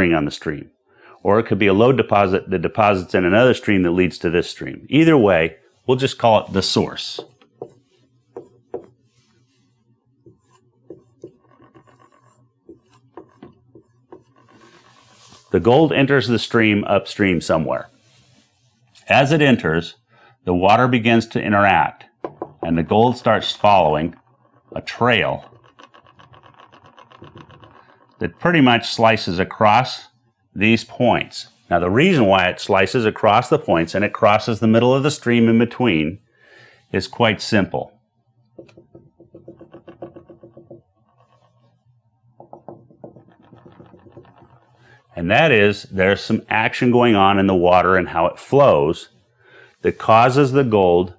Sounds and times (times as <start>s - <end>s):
Speech: 0.0s - 7.4s, 15.5s - 18.0s, 19.0s - 24.2s, 24.8s - 25.5s, 28.2s - 36.2s, 36.8s - 38.0s, 45.1s - 49.2s, 49.8s - 51.1s.